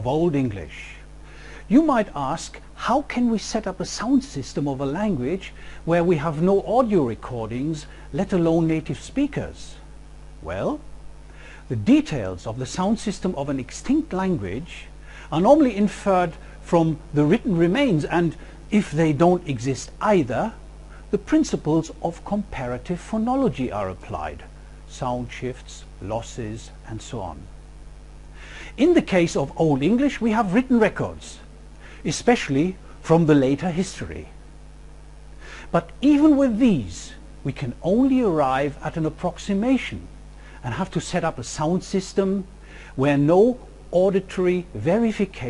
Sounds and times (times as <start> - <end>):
Speech: 0.0 - 1.1, 1.7 - 9.8, 10.4 - 10.9, 11.7 - 27.5, 28.7 - 34.4, 35.7 - 45.4.